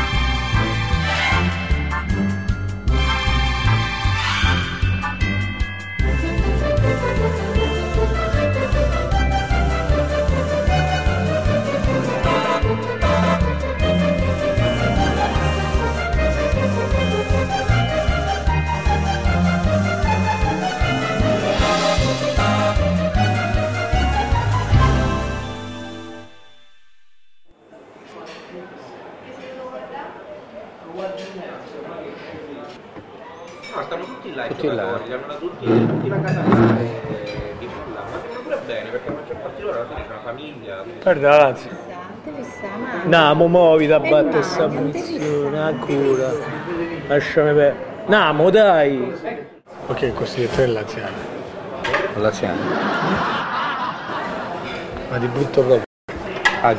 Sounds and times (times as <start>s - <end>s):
Music: 0.0s - 27.5s.